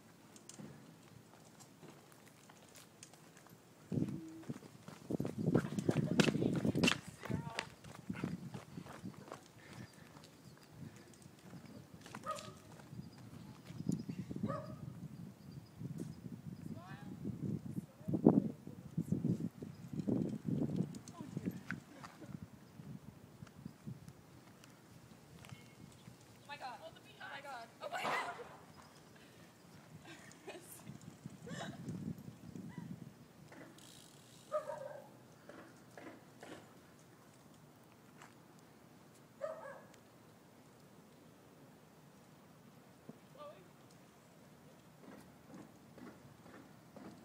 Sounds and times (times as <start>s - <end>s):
Bicycle: 0.0s - 16.3s, 19.3s - 27.5s, 28.2s - 47.2s.